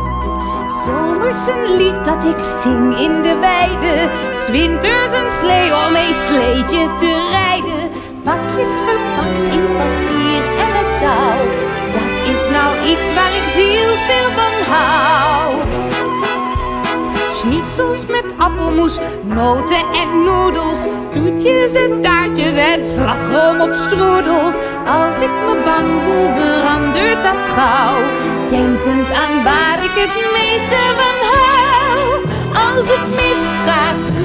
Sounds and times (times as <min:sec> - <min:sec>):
Music: 0:00.0 - 0:34.2.